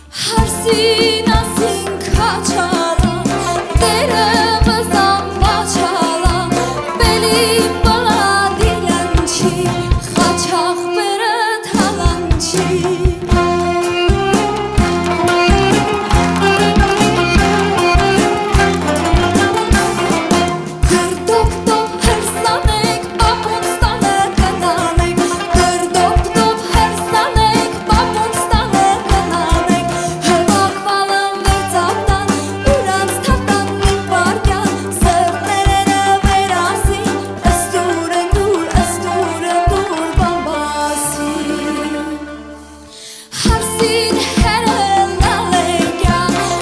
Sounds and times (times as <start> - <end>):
Folk music: 0.0 - 46.6.